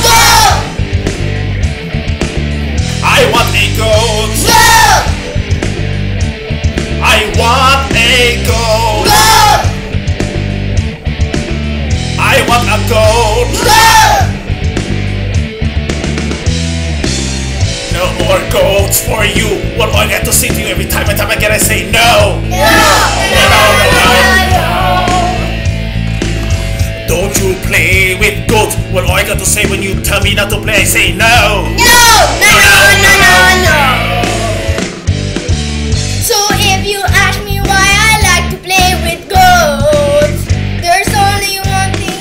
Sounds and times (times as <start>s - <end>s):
Music: 0.0s - 42.2s.